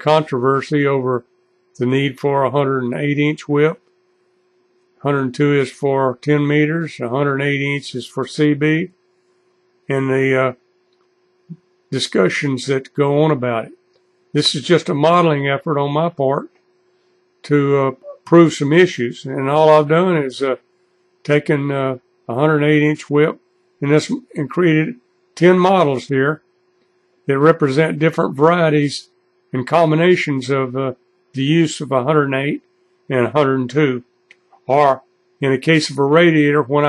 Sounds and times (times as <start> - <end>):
Speech: 0.0 - 1.2, 1.8 - 3.8, 5.0 - 8.9, 9.9 - 10.6, 11.5 - 13.8, 14.4 - 16.5, 17.5 - 20.6, 21.3 - 26.4, 27.3 - 36.8.